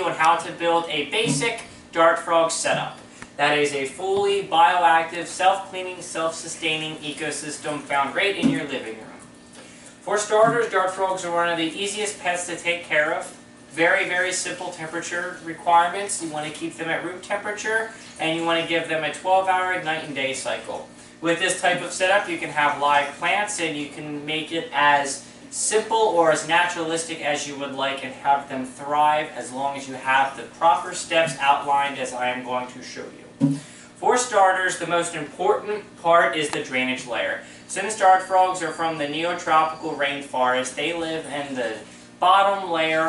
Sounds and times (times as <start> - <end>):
Speech: 0.0 - 9.3, 10.1 - 43.0.